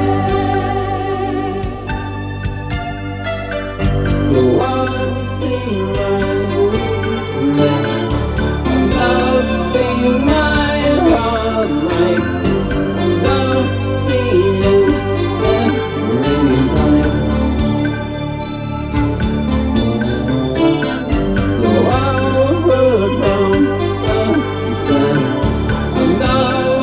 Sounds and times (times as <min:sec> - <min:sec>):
Music: 0:00.0 - 0:26.8.